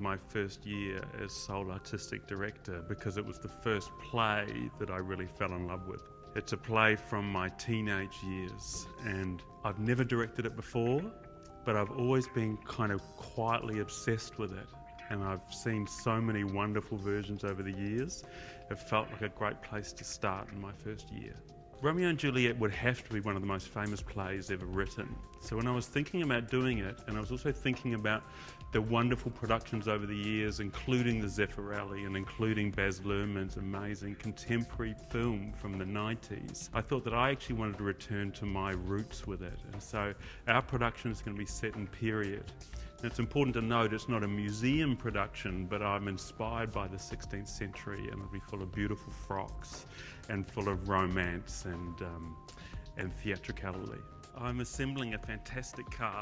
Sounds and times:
Speech: 0:00.0 - 0:52.4, 0:53.0 - 0:56.2
Music: 0:00.0 - 0:56.2.

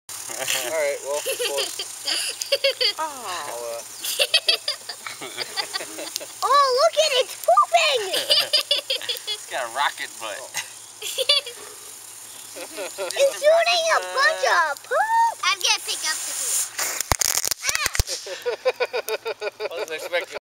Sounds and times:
Speech: 0:13.2 - 0:16.5.

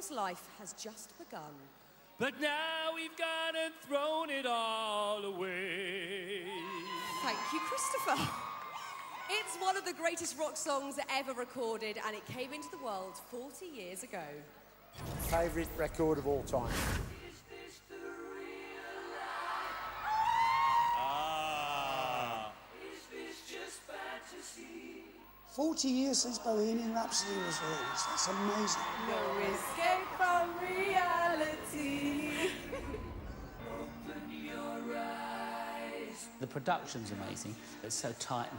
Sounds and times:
Music: 0:17.2 - 0:20.0, 0:29.0 - 0:38.5.

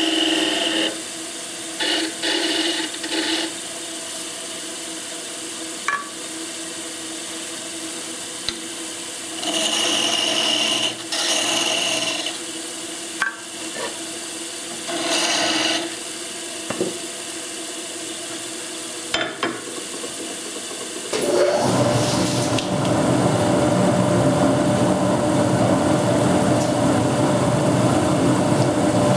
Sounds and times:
Filing (rasp): 0:00.0 - 0:01.0, 0:01.8 - 0:03.6, 0:09.4 - 0:12.4, 0:14.8 - 0:16.0.

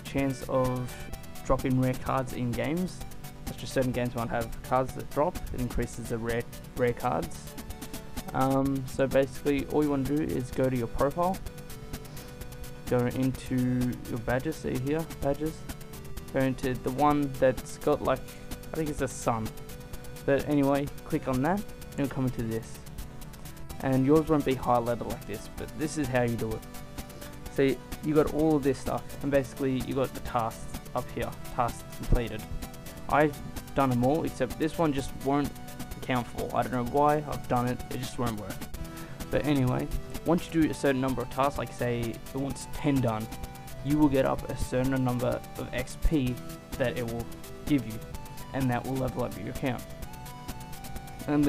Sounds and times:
Speech: 0:00.0 - 0:07.5, 0:08.3 - 0:11.4, 0:12.9 - 0:15.6, 0:16.3 - 0:19.6, 0:20.3 - 0:22.8, 0:23.8 - 0:26.6, 0:27.5 - 0:32.4, 0:33.1 - 0:38.6, 0:39.3 - 0:49.8, 0:51.3 - 0:51.4
Music: 0:00.0 - 0:51.4.

